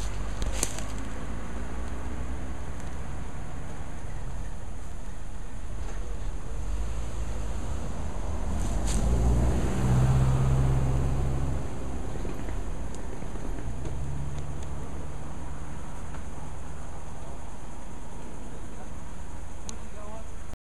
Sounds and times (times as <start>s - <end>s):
Outside, rural or natural: 0.0s - 20.6s
Speech: 19.8s - 20.4s.